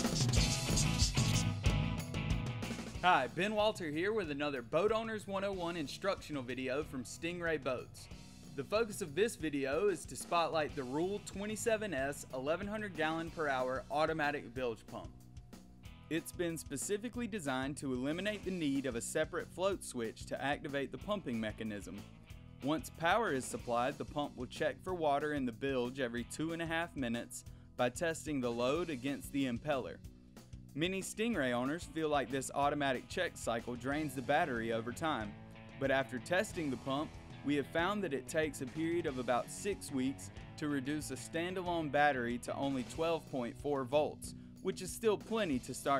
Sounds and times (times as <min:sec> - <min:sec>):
Music: 0:00.0 - 0:45.9
Speech: 0:03.0 - 0:15.1, 0:16.1 - 0:22.0, 0:22.6 - 0:30.0, 0:30.8 - 0:45.9.